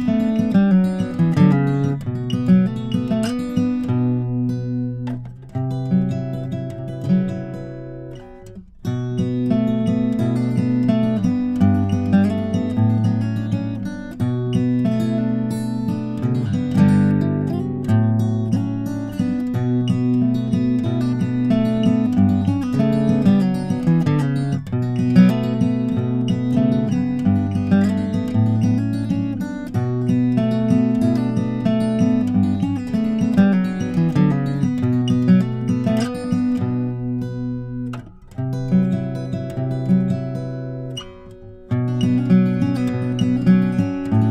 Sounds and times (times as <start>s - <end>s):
Acoustic guitar: 0.0s - 44.3s.